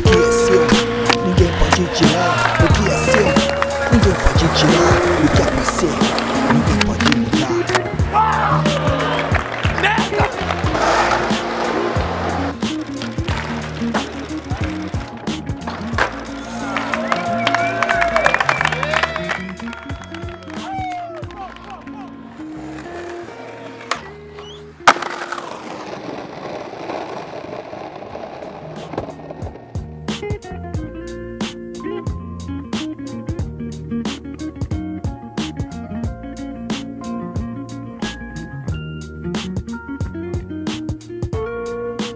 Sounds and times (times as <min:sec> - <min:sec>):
Skateboard: 0:00.0 - 0:21.3, 0:22.0 - 0:30.3
Music: 0:00.0 - 0:26.0, 0:28.4 - 0:42.1.